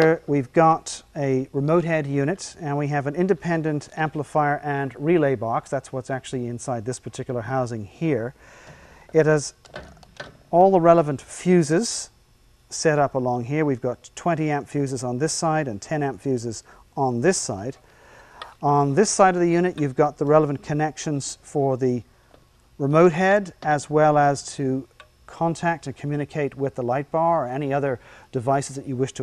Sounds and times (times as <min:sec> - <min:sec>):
Speech: 0:00.0 - 0:08.4, 0:09.1 - 0:09.6, 0:10.6 - 0:17.8, 0:18.6 - 0:22.1, 0:22.8 - 0:29.2.